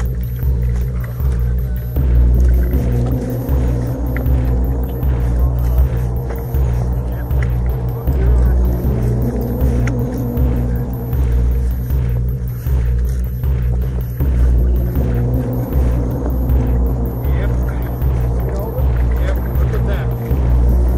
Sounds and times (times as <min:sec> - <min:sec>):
Boat, Water vehicle: 0:00.0 - 0:20.9
Music: 0:00.0 - 0:20.9
Speech: 0:00.9 - 0:03.2, 0:06.9 - 0:09.2, 0:17.1 - 0:20.4.